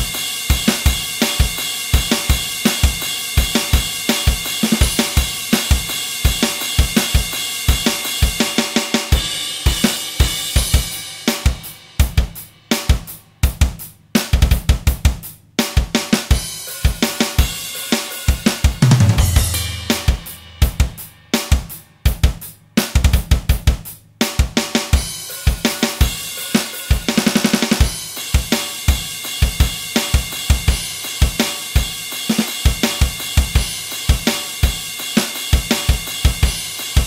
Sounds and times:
Drum kit: 0.0s - 37.0s
Bass drum: 9.2s - 17.6s, 18.3s - 26.3s.

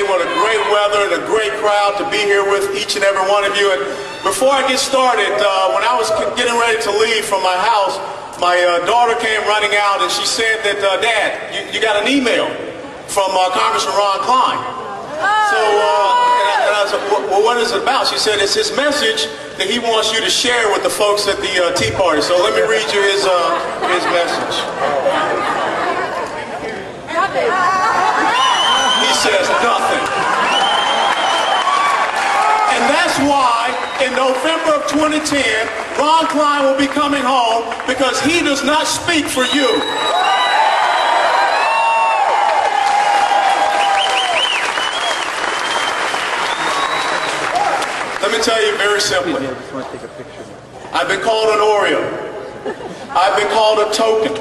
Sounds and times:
Male speech, man speaking: 0.0s - 14.7s, 15.5s - 24.7s, 28.9s - 30.1s, 32.7s - 39.9s, 48.2s - 50.0s, 50.9s - 52.2s, 53.2s - 54.4s
Narration, monologue: 0.0s - 24.8s, 32.7s - 40.2s, 48.1s - 49.8s, 50.6s - 54.4s.

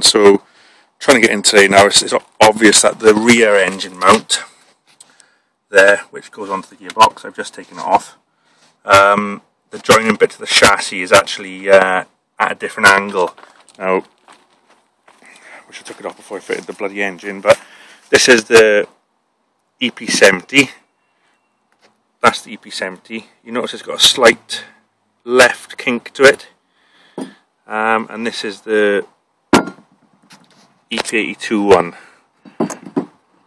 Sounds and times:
Speech: 0.0s - 0.4s, 1.0s - 4.6s, 5.7s - 8.2s, 8.9s - 14.1s, 15.6s - 19.0s, 19.8s - 20.8s, 22.2s - 26.6s, 27.7s - 29.1s, 30.9s - 32.0s.

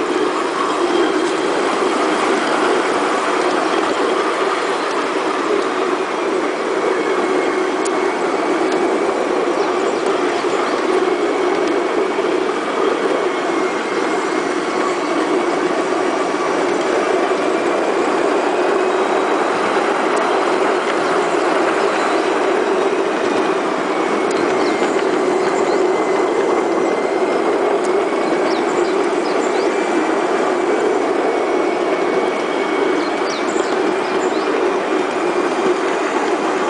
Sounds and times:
Outside, rural or natural: 0.0s - 36.6s
Train: 0.0s - 36.6s.

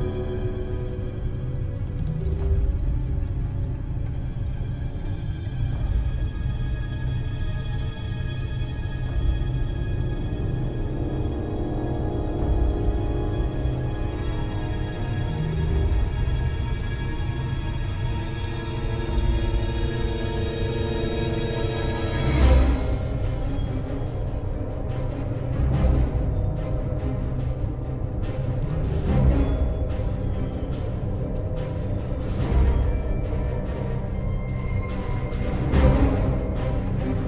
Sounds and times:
Music: 0.0s - 37.2s.

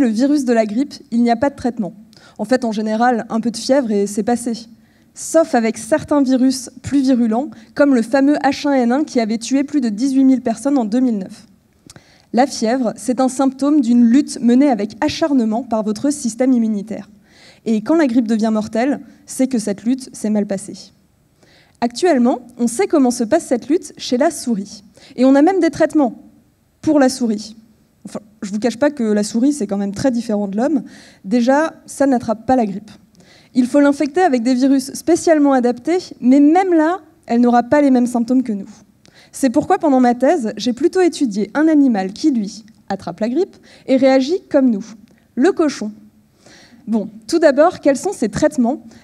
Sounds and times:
Speech: 0.0s - 11.5s, 12.4s - 17.1s, 17.7s - 21.0s, 21.8s - 26.2s, 26.8s - 33.0s, 33.6s - 46.0s, 46.9s - 48.8s.

